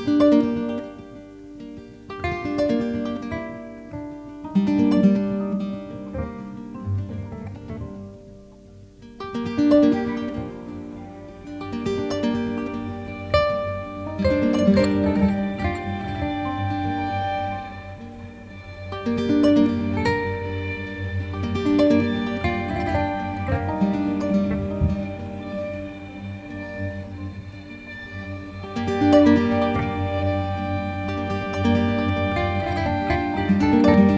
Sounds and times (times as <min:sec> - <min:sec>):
Music: 0:00.0 - 0:34.1.